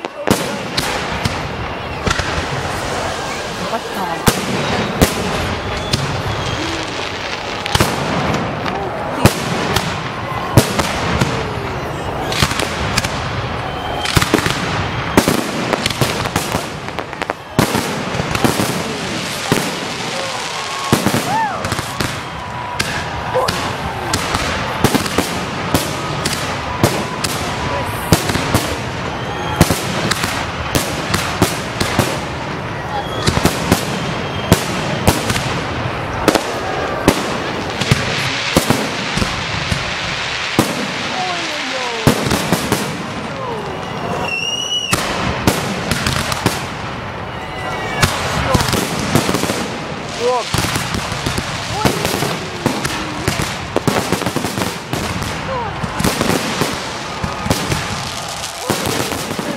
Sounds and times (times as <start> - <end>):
Speech: 0.0 - 0.8, 41.1 - 42.2, 50.2 - 50.5, 55.4 - 55.9
Firecracker: 0.0 - 59.5.